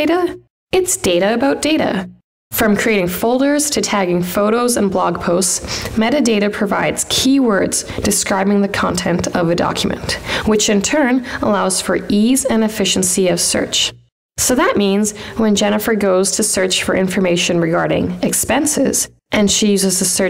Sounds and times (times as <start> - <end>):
Speech synthesizer: 0.0 - 20.2.